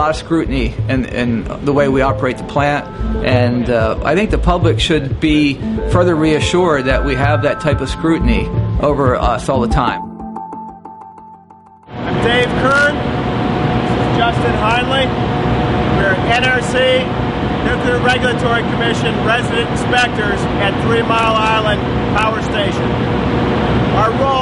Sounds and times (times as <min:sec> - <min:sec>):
Speech: 0:00.0 - 0:10.0, 0:12.1 - 0:13.0, 0:14.0 - 0:15.1, 0:16.0 - 0:22.9, 0:24.0 - 0:24.4
Music: 0:00.0 - 0:12.9.